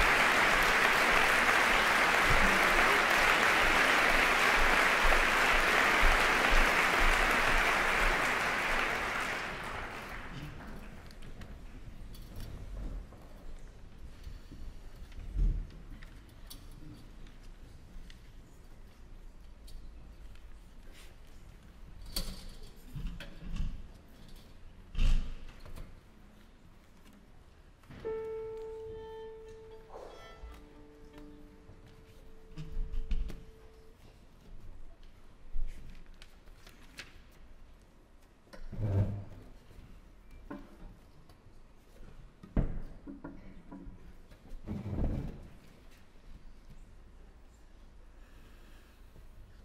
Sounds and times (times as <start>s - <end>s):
Music: 28.0s - 33.6s.